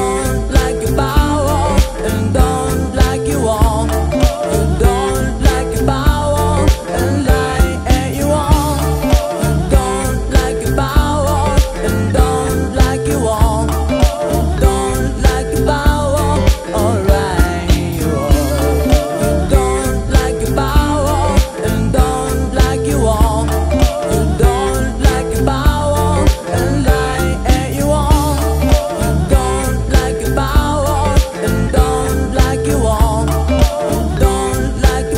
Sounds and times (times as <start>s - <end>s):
Happy music: 0.0s - 35.1s.